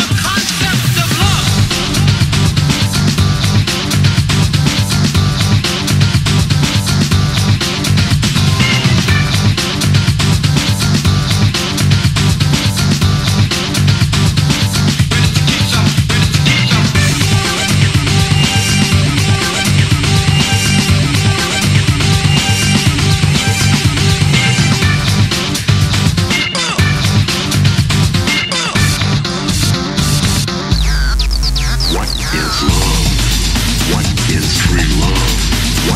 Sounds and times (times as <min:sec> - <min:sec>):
Music: 0:00.0 - 0:35.9.